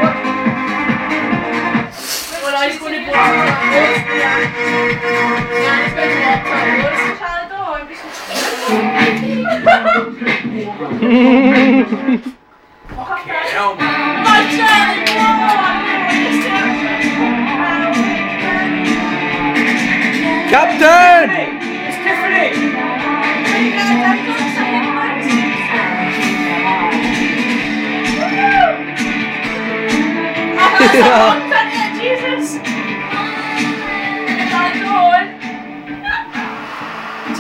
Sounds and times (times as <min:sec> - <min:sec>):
Music: 0:00.0 - 0:37.4.